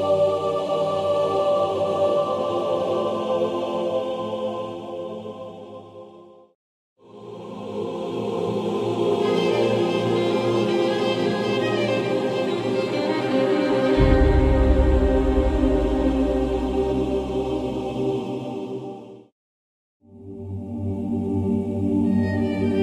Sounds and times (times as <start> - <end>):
Music: 7.2 - 19.3, 20.3 - 22.8.